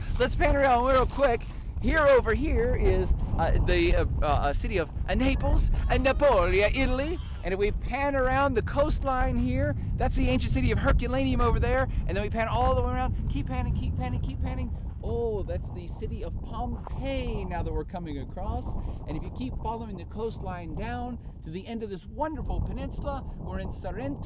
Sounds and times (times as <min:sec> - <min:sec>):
Speech: 0:00.2 - 0:24.2.